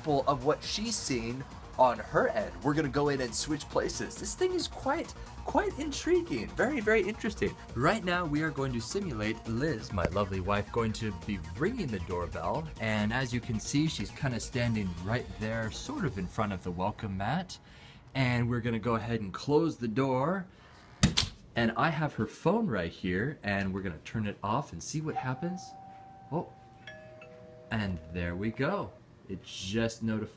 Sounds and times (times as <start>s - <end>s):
Music: 0.0s - 17.8s
Speech: 0.0s - 20.5s, 21.6s - 25.7s, 27.7s - 30.3s.